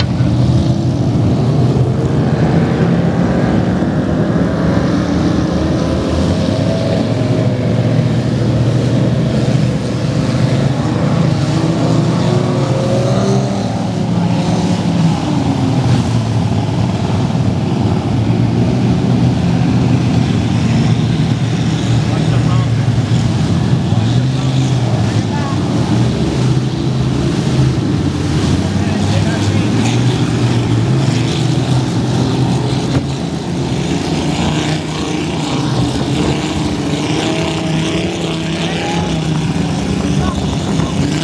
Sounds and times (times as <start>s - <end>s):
Motorboat, speedboat: 0.0s - 41.2s
Speech: 22.1s - 22.9s, 24.4s - 25.8s, 28.8s - 30.1s, 40.0s - 41.2s.